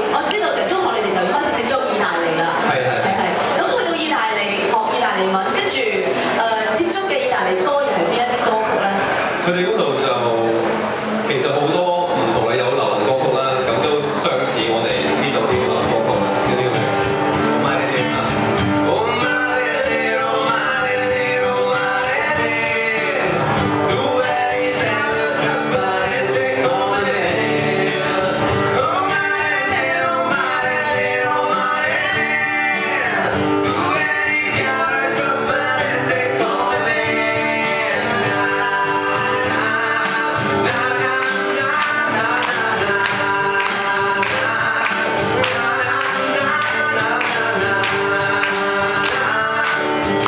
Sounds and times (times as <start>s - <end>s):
Speech: 0.0s - 10.7s, 11.3s - 17.0s
Music: 0.0s - 50.2s
Male singing: 17.6s - 50.2s.